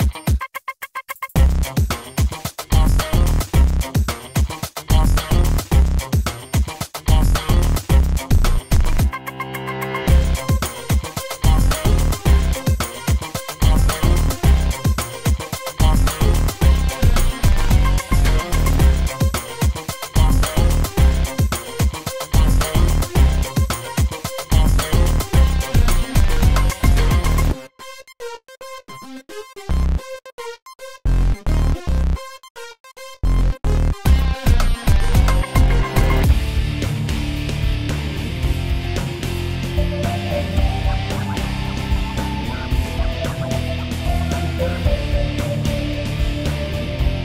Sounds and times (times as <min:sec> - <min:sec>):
Music: 0:00.0 - 0:47.2.